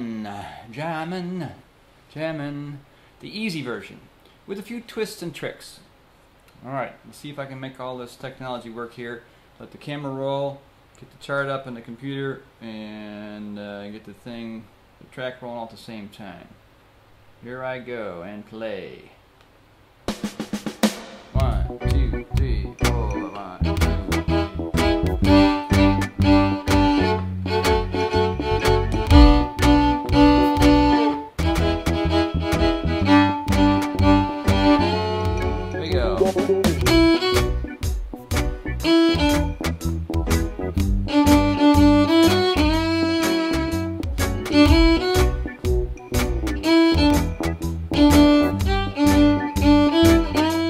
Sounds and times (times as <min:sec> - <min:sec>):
Speech: 0:00.0 - 0:05.9, 0:06.6 - 0:16.6, 0:17.4 - 0:19.2, 0:21.4 - 0:23.7, 0:35.8 - 0:36.8
Violin, fiddle: 0:23.6 - 0:36.6, 0:41.1 - 0:43.8, 0:44.5 - 0:45.3, 0:46.6 - 0:47.4, 0:48.0 - 0:50.7.